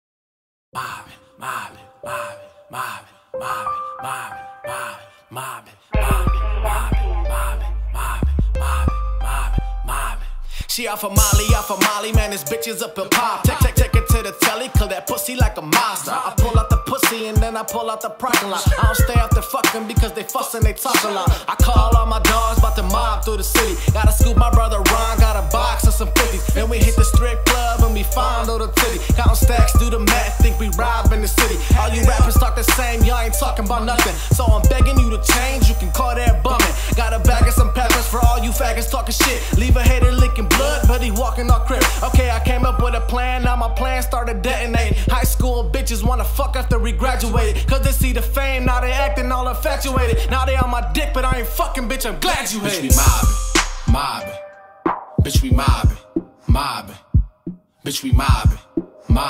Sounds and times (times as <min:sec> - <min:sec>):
Music: 0:00.8 - 0:59.3.